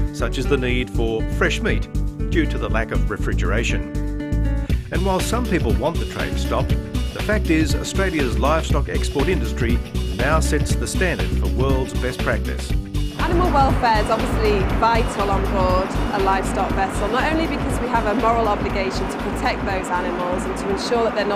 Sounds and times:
Music: 0:00.0 - 0:21.3
Speech: 0:00.2 - 0:03.8, 0:04.9 - 0:21.3.

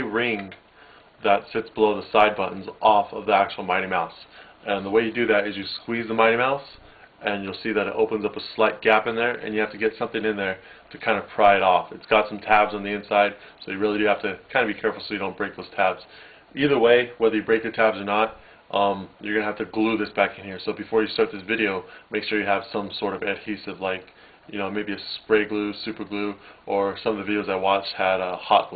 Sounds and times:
Speech: 0:00.0 - 0:00.6, 0:01.2 - 0:28.7.

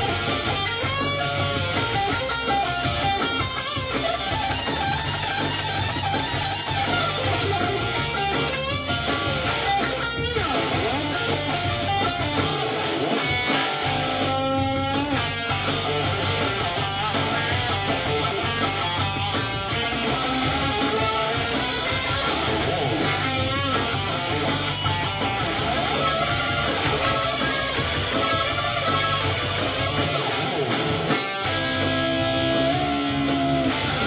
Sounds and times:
Electric guitar: 0:00.0 - 0:34.0
Strum: 0:00.0 - 0:34.0.

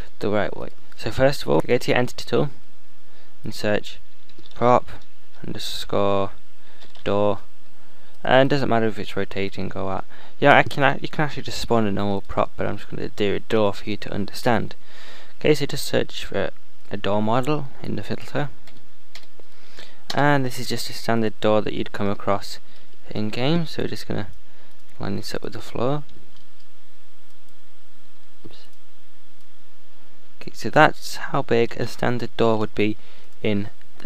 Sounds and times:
Speech: 0:00.2 - 0:02.6, 0:03.4 - 0:04.0, 0:04.6 - 0:06.4, 0:07.0 - 0:07.5, 0:08.2 - 0:14.8, 0:15.4 - 0:18.6, 0:20.1 - 0:24.3, 0:25.0 - 0:26.1, 0:30.4 - 0:34.0.

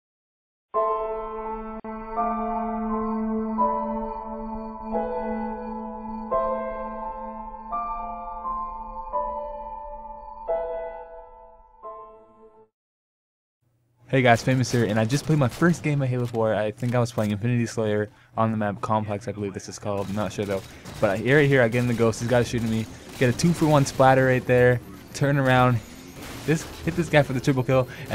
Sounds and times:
Keyboard (musical): 0:00.8 - 0:12.7.

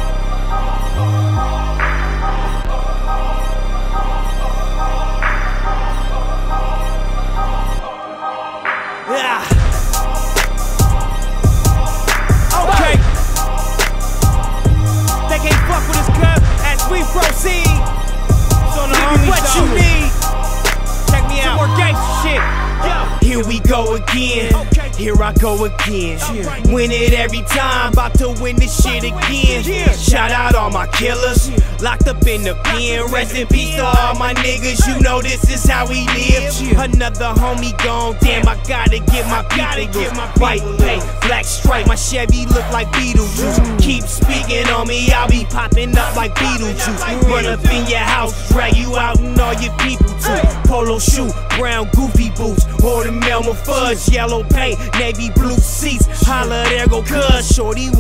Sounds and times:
Music: 0:00.0 - 0:58.0.

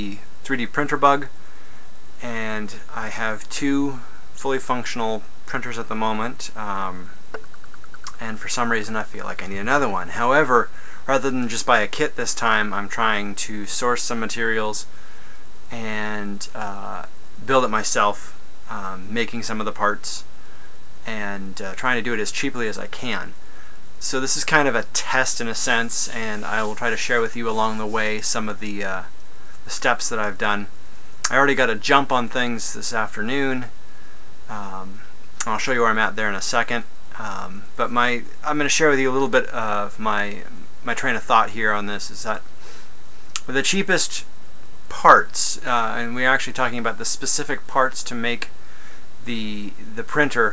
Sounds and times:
Speech: 0:00.0 - 0:01.3, 0:02.2 - 0:07.2, 0:08.0 - 0:14.9, 0:15.7 - 0:20.3, 0:21.0 - 0:23.4, 0:24.0 - 0:29.1, 0:29.7 - 0:30.7, 0:31.3 - 0:33.7, 0:34.5 - 0:42.5, 0:43.4 - 0:44.3, 0:44.9 - 0:48.5, 0:49.2 - 0:50.5.

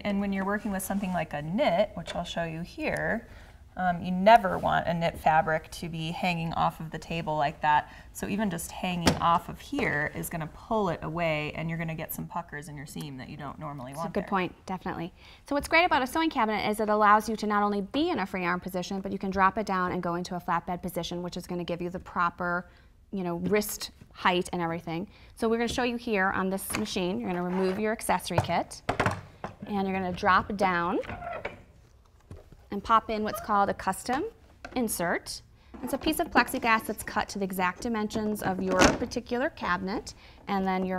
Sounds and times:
Speech: 0:03.8 - 0:22.5.

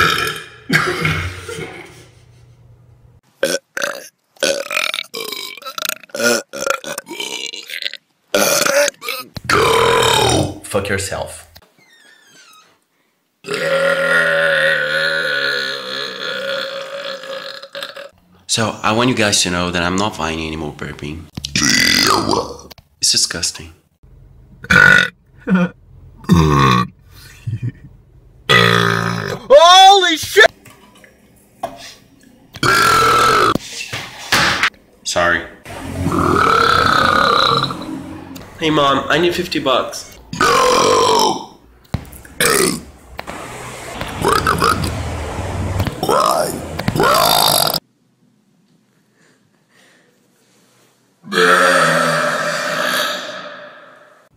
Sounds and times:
Burping, eructation: 0:00.0 - 0:01.4, 0:03.4 - 0:10.6, 0:13.4 - 0:18.2, 0:21.6 - 0:22.5, 0:24.6 - 0:27.0, 0:28.5 - 0:29.5, 0:32.6 - 0:33.6, 0:36.0 - 0:38.0, 0:40.3 - 0:41.6, 0:51.3 - 0:54.3
Speech: 0:10.5 - 0:11.5, 0:18.5 - 0:21.3, 0:22.4 - 0:23.8, 0:29.5 - 0:30.5, 0:35.0 - 0:35.6, 0:38.6 - 0:40.2.

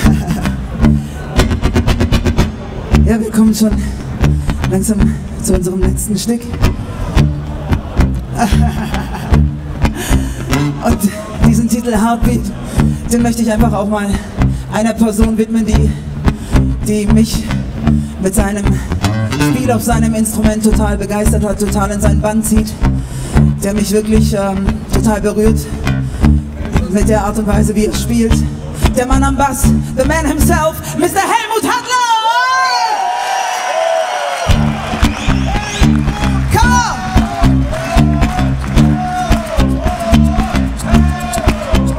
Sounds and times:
Music: 0:00.0 - 0:31.2, 0:34.5 - 0:41.9.

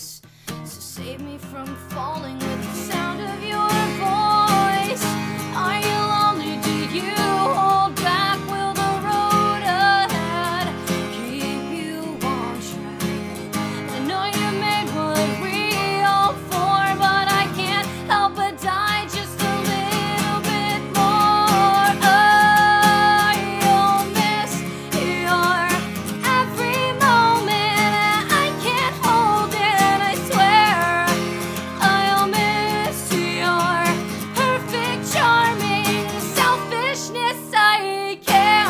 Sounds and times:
Music: 0:00.0 - 0:38.6.

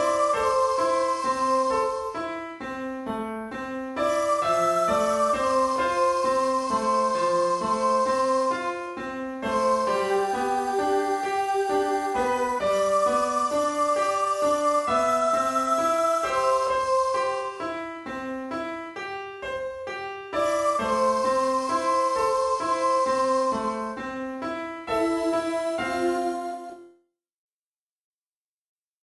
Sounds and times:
Music: 0:00.0 - 0:27.2.

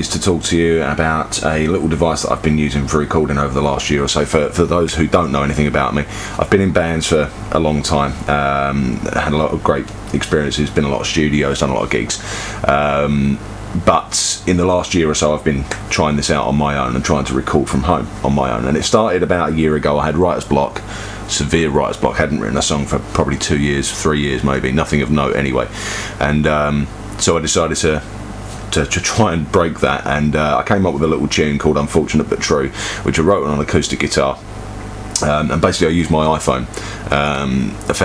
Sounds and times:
Speech: 0:00.0 - 0:28.1, 0:28.7 - 0:34.5, 0:35.2 - 0:38.0.

